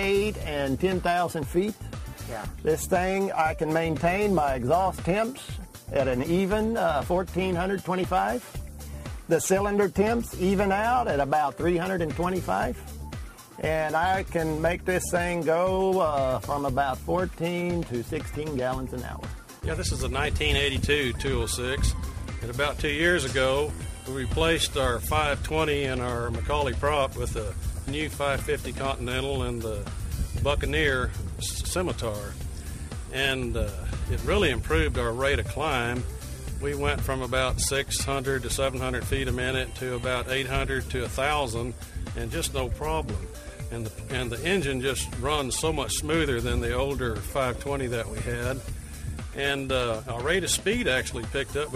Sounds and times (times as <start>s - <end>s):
Speech: 0.0s - 8.5s, 9.3s - 12.8s, 13.6s - 32.4s, 33.1s - 48.7s, 49.4s - 51.7s
Music: 0.0s - 51.7s.